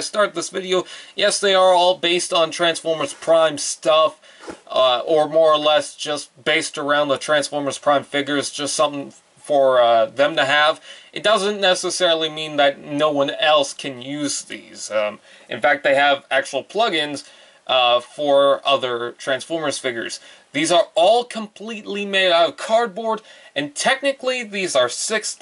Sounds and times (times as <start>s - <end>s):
Speech: 0.0s - 25.4s.